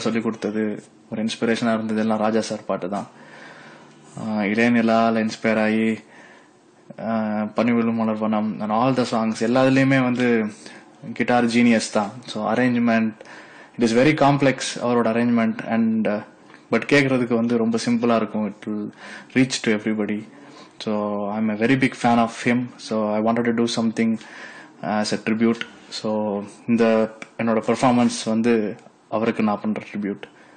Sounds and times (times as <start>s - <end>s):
Speech: 0.0s - 3.2s, 4.2s - 6.1s, 6.9s - 13.2s, 13.8s - 30.4s.